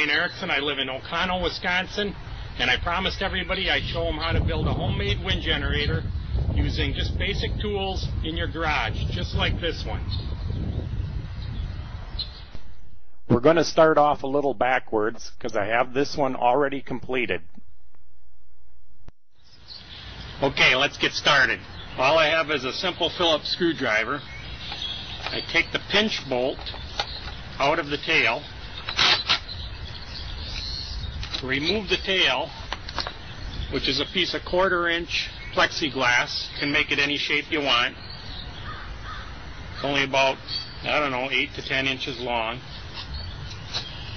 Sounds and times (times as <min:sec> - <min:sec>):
Speech: 0:00.0 - 0:06.0, 0:06.6 - 0:10.1, 0:13.3 - 0:17.5, 0:20.4 - 0:24.2, 0:25.3 - 0:26.6, 0:27.6 - 0:28.5, 0:31.4 - 0:32.6, 0:33.7 - 0:38.0, 0:39.8 - 0:42.7.